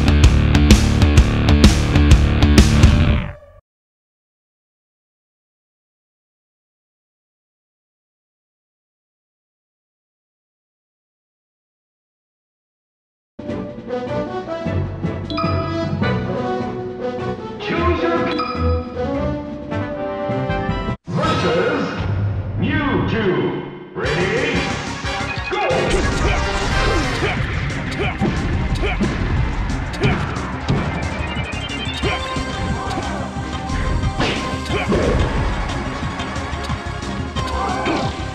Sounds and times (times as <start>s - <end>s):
Music: 0.0s - 3.6s, 13.4s - 21.0s, 23.8s - 38.3s
Speech: 17.6s - 18.4s, 21.1s - 24.7s.